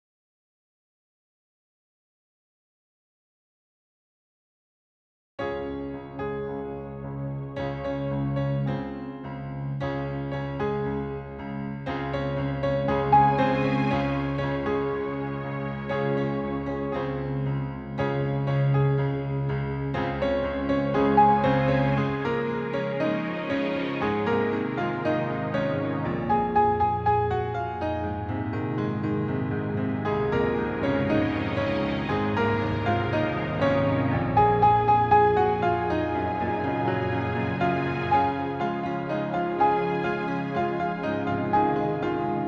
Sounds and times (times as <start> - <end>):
Music: 5.4 - 42.4.